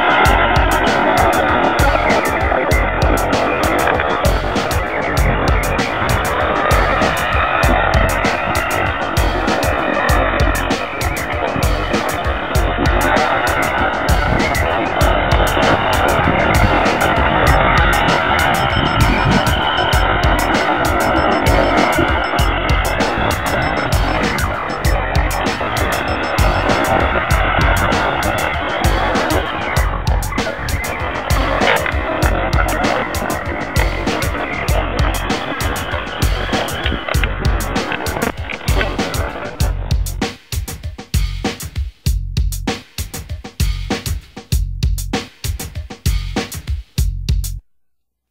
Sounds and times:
Outside, rural or natural: 0.0s - 41.7s
Music: 0.0s - 47.6s.

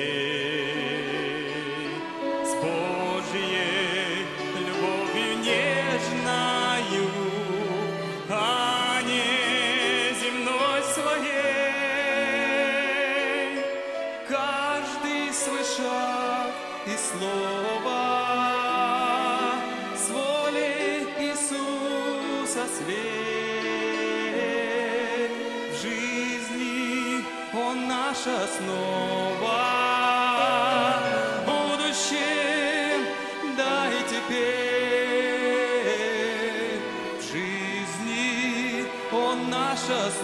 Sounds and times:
Orchestra: 0.0s - 40.2s
Violin, fiddle: 0.0s - 40.2s.

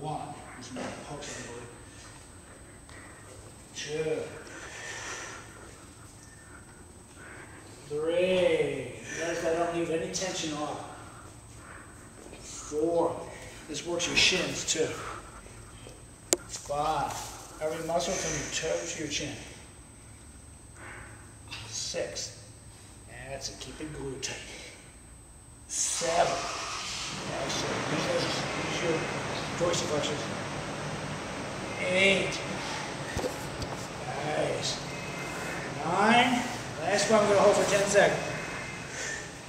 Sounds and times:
Speech: 0.0s - 1.8s, 3.8s - 4.4s, 7.9s - 11.0s, 12.6s - 15.1s, 16.5s - 19.6s, 21.6s - 22.4s, 23.1s - 24.8s, 25.7s - 26.5s, 27.2s - 30.3s, 31.7s - 32.5s, 34.0s - 34.9s, 35.8s - 38.4s.

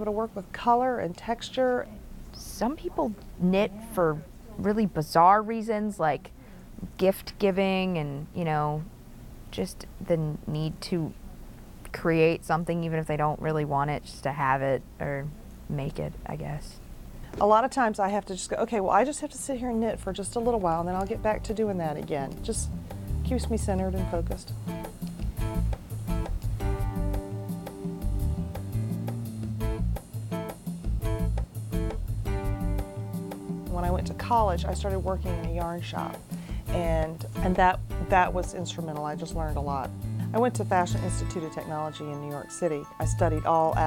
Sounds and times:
Speech: 0.0s - 8.9s, 9.5s - 11.2s, 11.9s - 16.8s, 17.4s - 22.7s, 23.3s - 24.5s, 33.7s - 43.8s.

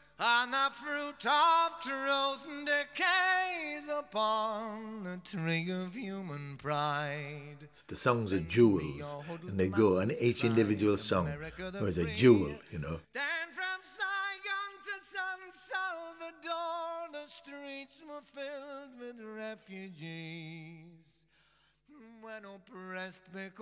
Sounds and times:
Speech: 7.9s - 13.1s.

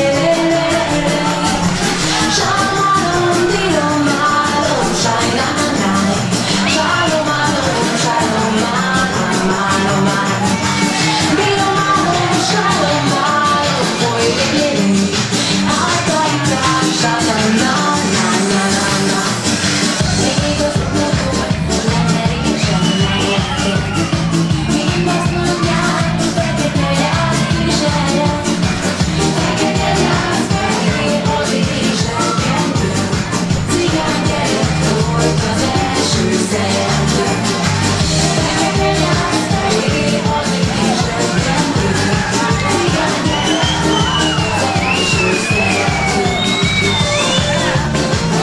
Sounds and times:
Music: 0.0s - 48.4s.

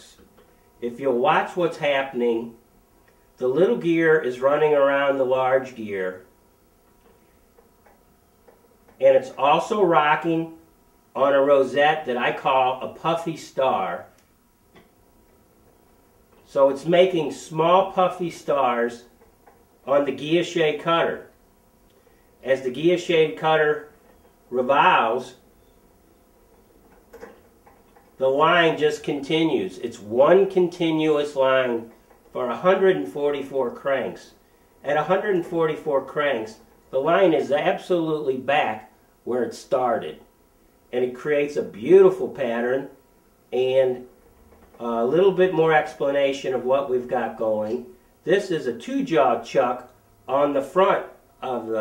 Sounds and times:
Speech: 0.0s - 2.6s, 3.4s - 6.3s, 9.0s - 10.6s, 11.2s - 14.2s, 16.5s - 19.1s, 19.9s - 21.3s, 22.4s - 23.9s, 24.5s - 25.4s, 28.2s - 40.3s, 40.9s - 44.1s, 44.8s - 51.8s.

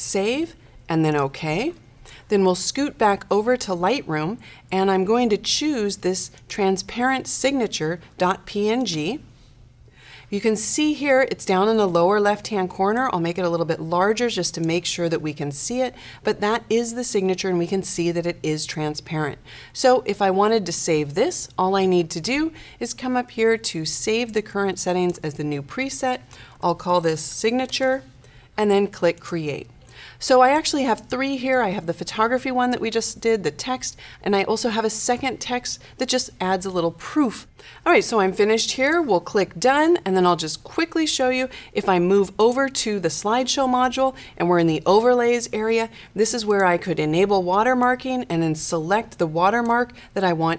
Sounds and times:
Speech: 0.0s - 9.3s, 10.3s - 50.5s.

